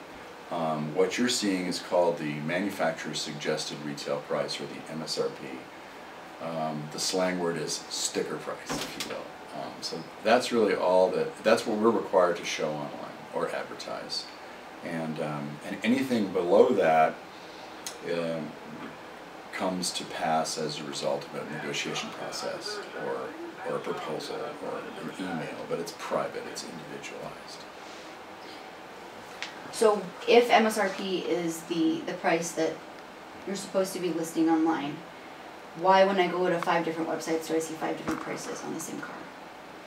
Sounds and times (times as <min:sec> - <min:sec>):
Speech: 0:00.5 - 0:05.6, 0:06.4 - 0:17.2, 0:17.9 - 0:18.9, 0:19.6 - 0:27.7, 0:29.7 - 0:32.8, 0:33.5 - 0:35.0, 0:35.8 - 0:39.3.